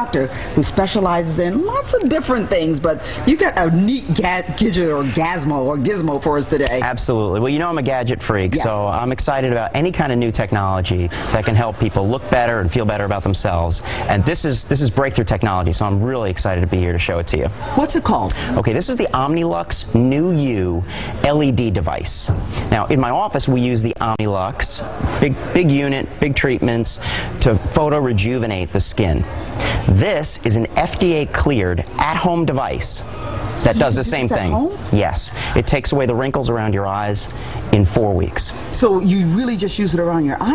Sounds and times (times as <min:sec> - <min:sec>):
Speech: 0:00.0 - 0:40.5.